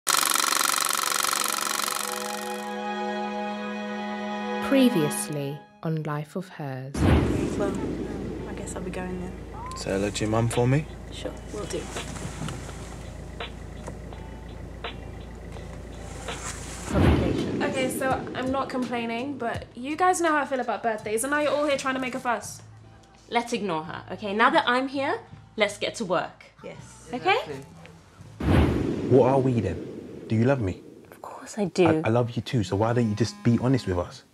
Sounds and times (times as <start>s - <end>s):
Music: 2.5s - 6.6s, 7.5s - 28.4s.